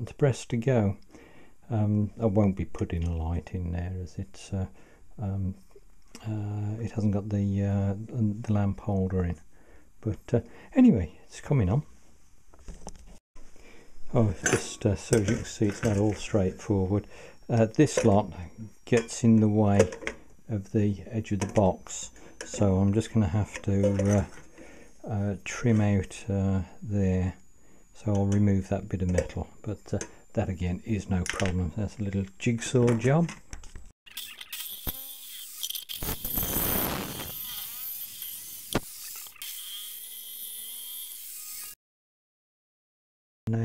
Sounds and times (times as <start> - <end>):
Speech: 0.0 - 1.0, 1.7 - 5.6, 6.2 - 9.4, 10.0 - 11.9, 14.1 - 24.4, 25.1 - 27.4, 28.0 - 33.4.